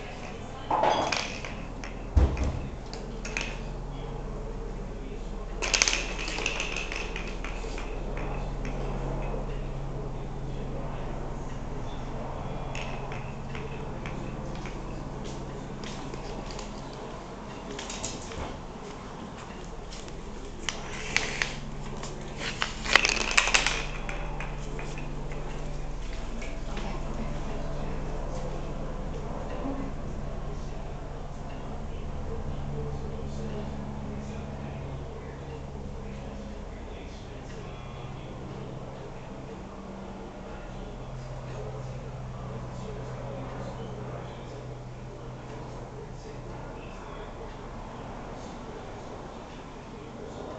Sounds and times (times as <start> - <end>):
Inside, small room: 0.0 - 50.5
Speech: 0.0 - 50.5.